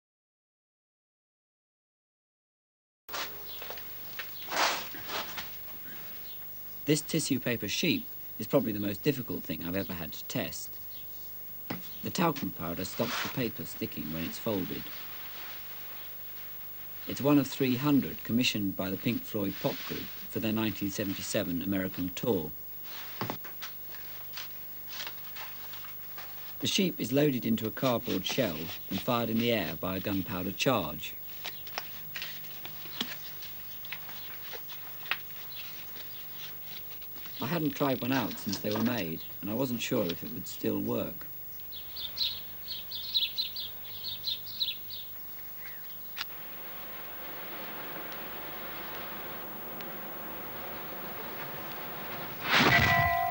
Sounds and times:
Speech: 0:06.9 - 0:10.8, 0:12.0 - 0:15.0, 0:17.1 - 0:22.6, 0:26.6 - 0:31.2, 0:37.4 - 0:41.3.

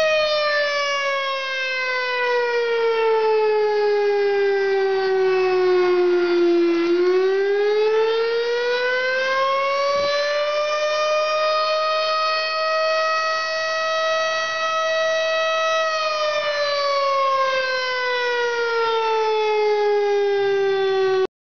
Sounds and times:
Civil defense siren: 0:00.0 - 0:21.3.

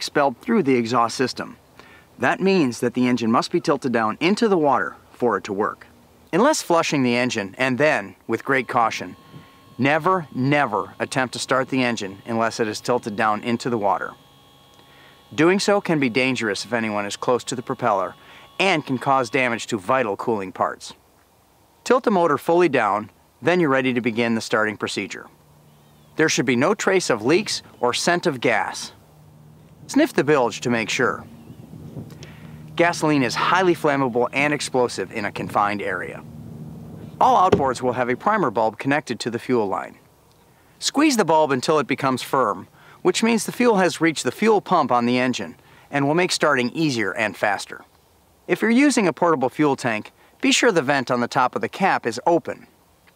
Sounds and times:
Speech: 0:00.0 - 0:01.6, 0:02.2 - 0:09.2, 0:09.8 - 0:14.2, 0:15.4 - 0:21.0, 0:21.8 - 0:25.3, 0:26.2 - 0:29.0, 0:29.9 - 0:31.3, 0:32.8 - 0:36.2, 0:37.2 - 0:40.0, 0:40.8 - 0:47.9, 0:48.5 - 0:52.7.

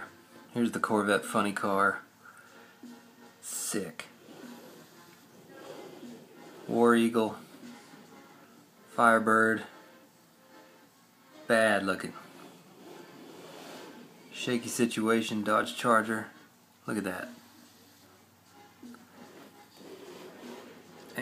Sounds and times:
Inside, small room: 0:00.0 - 0:21.2
Speech: 0:00.6 - 0:02.0, 0:03.4 - 0:04.1, 0:06.7 - 0:07.4, 0:09.0 - 0:09.7, 0:11.5 - 0:12.2, 0:14.4 - 0:17.4.

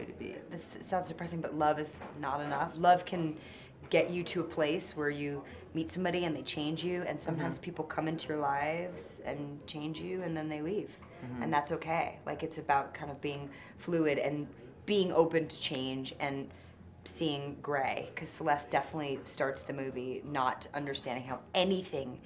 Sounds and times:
Speech: 0:00.0 - 0:16.5.

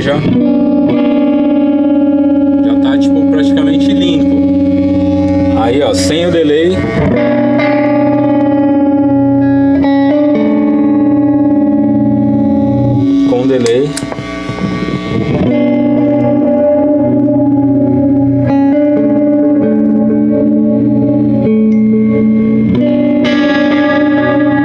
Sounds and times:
Speech: 0:00.0 - 0:00.3, 0:02.6 - 0:04.3, 0:05.6 - 0:06.9, 0:13.3 - 0:14.0
Guitar: 0:00.0 - 0:24.6.

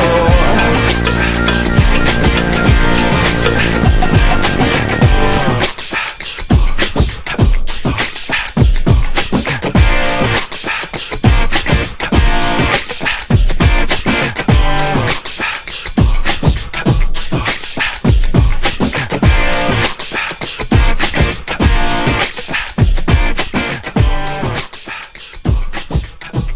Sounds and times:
Beatboxing: 0:00.0 - 0:26.5.

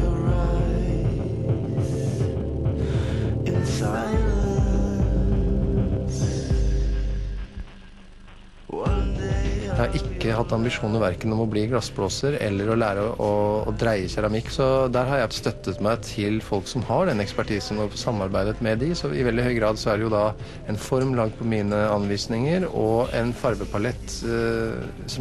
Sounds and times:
Music: 0:00.0 - 0:25.2
Speech: 0:09.7 - 0:25.2.

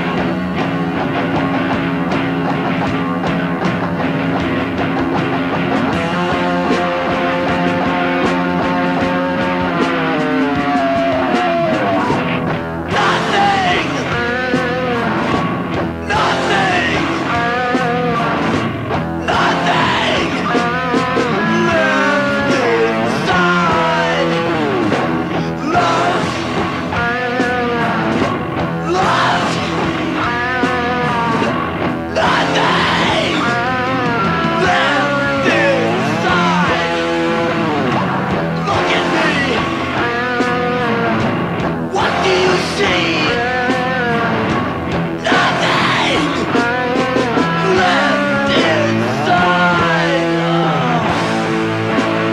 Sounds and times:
Music: 0:00.0 - 0:52.3.

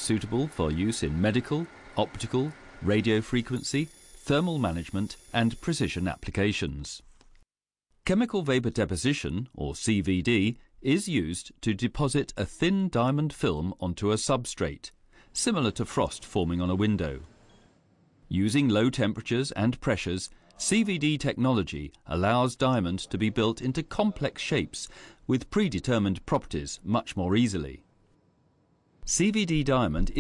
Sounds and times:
Speech: 0:00.0 - 0:07.0, 0:08.1 - 0:17.3, 0:18.3 - 0:27.8, 0:29.0 - 0:30.2.

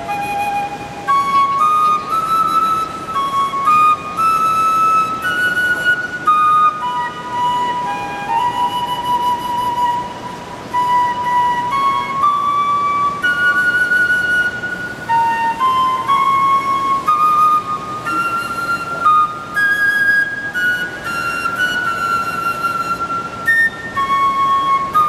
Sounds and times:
Flute: 0:00.0 - 0:25.0.

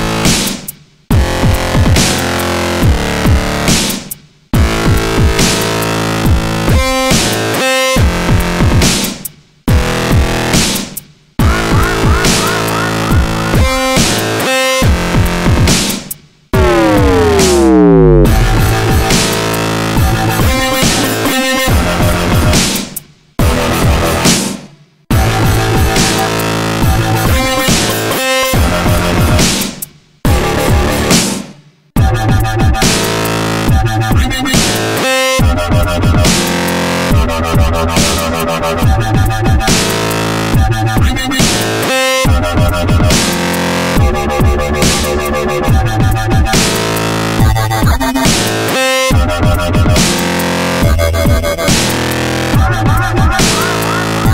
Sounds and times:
Dubstep: 0:04.6 - 0:29.7, 0:32.3 - 0:54.3.

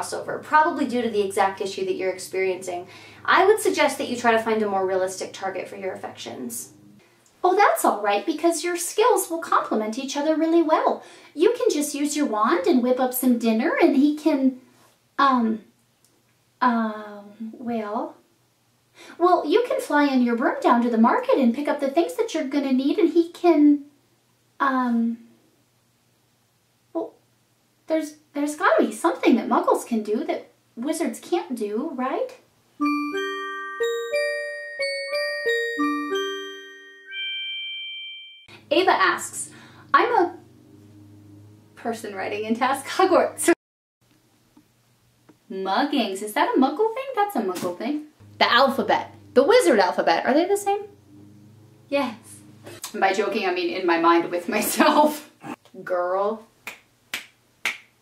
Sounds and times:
Speech: 0:00.0 - 0:06.7, 0:07.4 - 0:14.6, 0:15.2 - 0:15.7, 0:16.6 - 0:18.2, 0:19.2 - 0:23.9, 0:24.6 - 0:25.3, 0:27.0 - 0:27.2, 0:27.9 - 0:32.4, 0:38.7 - 0:40.4, 0:41.8 - 0:43.6, 0:45.5 - 0:50.9, 0:51.9 - 0:56.5
Inside, small room: 0:00.0 - 0:58.0
Music: 0:32.8 - 0:37.6.

